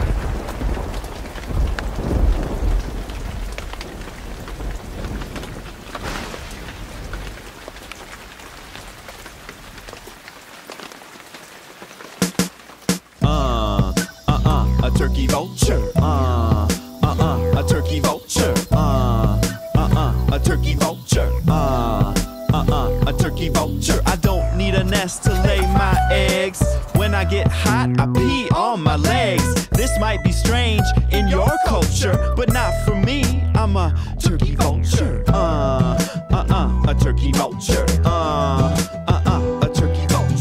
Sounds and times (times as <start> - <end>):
Music: 13.2 - 40.4.